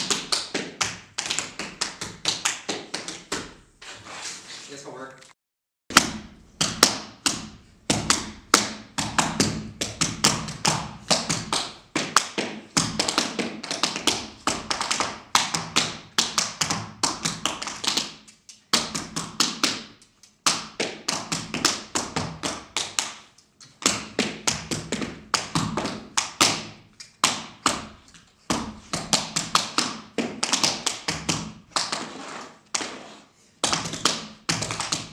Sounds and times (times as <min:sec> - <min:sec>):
Inside, small room: 0:00.0 - 0:35.1
Speech: 0:04.6 - 0:05.4.